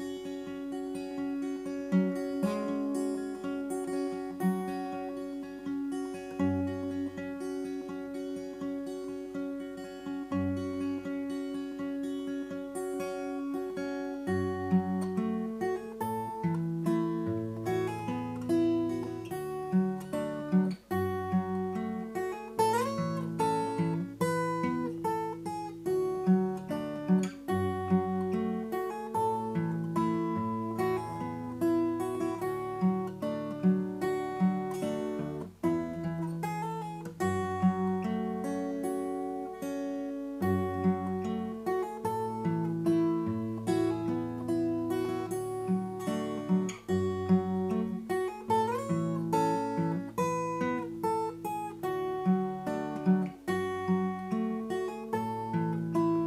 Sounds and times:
Acoustic guitar: 0.0s - 56.2s.

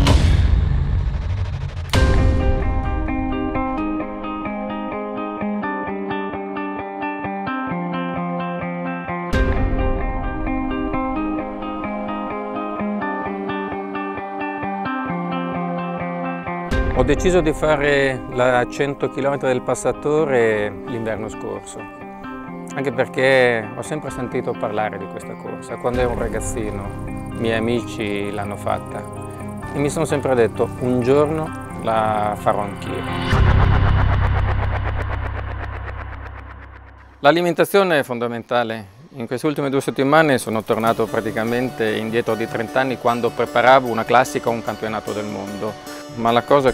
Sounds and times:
Music: 0.0s - 46.7s
Speech: 17.0s - 21.9s, 22.7s - 29.0s, 29.7s - 33.1s, 37.2s - 46.7s.

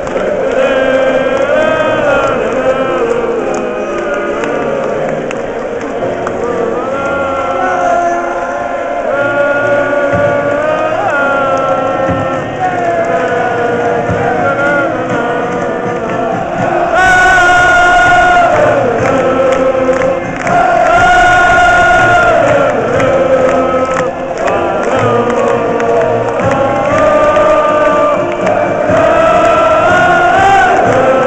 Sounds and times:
Music: 0.0s - 31.2s.

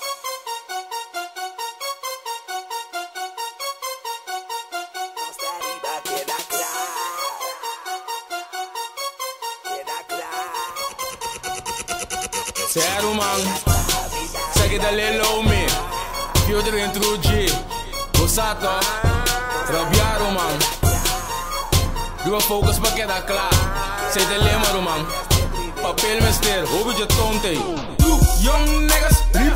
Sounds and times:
Music: 0.0s - 29.5s.

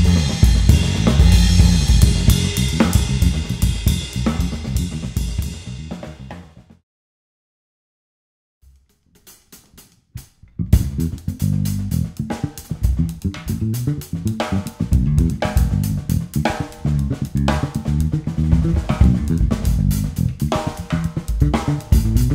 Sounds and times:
Bass drum: 0.0s - 6.6s, 10.6s - 22.3s
Drum kit: 0.0s - 6.8s, 8.7s - 22.3s.

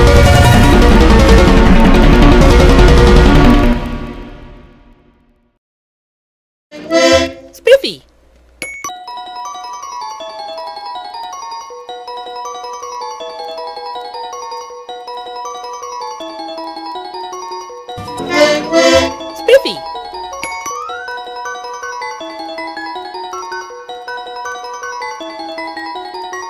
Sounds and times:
Music: 0.0s - 5.6s, 6.7s - 7.6s, 8.9s - 26.5s
Speech: 7.5s - 8.1s, 19.4s - 19.9s.

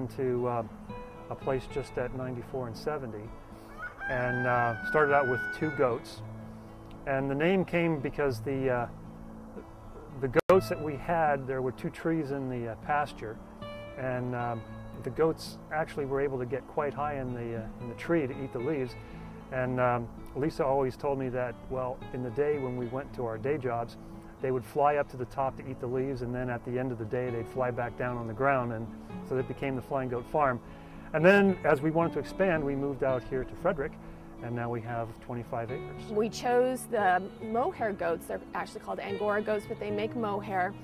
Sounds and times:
Speech: 0.0s - 0.7s, 1.3s - 3.3s, 7.0s - 8.9s, 10.2s - 13.4s, 14.0s - 30.6s, 31.2s - 40.8s
Music: 0.0s - 40.8s.

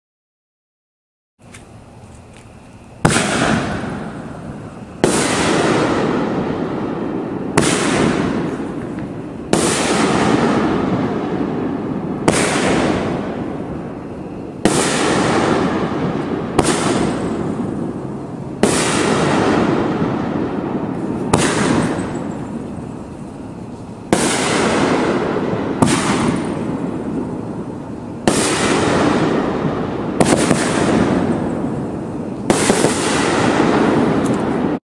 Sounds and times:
Burst, pop: 3.0s - 4.1s, 5.0s - 6.2s, 7.6s - 11.0s, 12.2s - 13.1s, 14.6s - 17.4s, 18.6s - 20.0s, 21.2s - 22.2s, 24.1s - 26.8s, 28.3s - 29.4s, 30.2s - 31.4s, 32.5s - 34.7s.

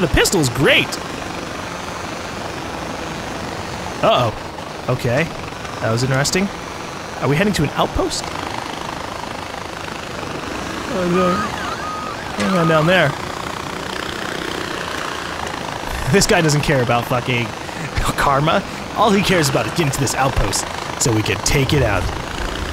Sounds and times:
Helicopter: 0.0s - 22.7s.

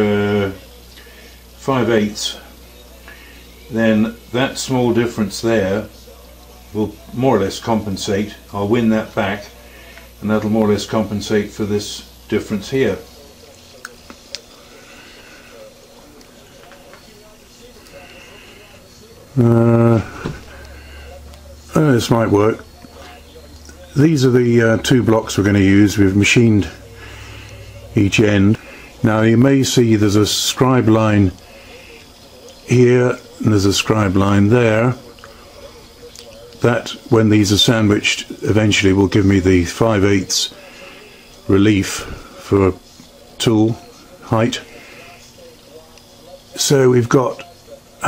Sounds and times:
Speech: 0.0s - 48.0s.

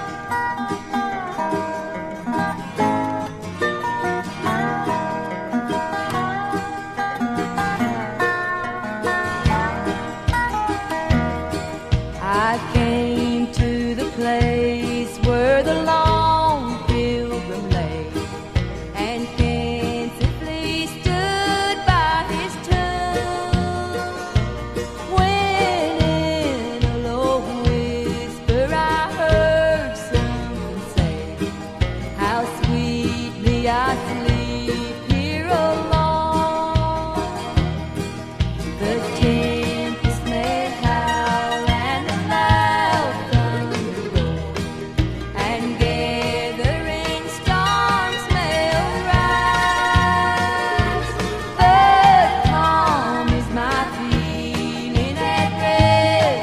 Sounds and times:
Music: 0.0s - 56.4s.

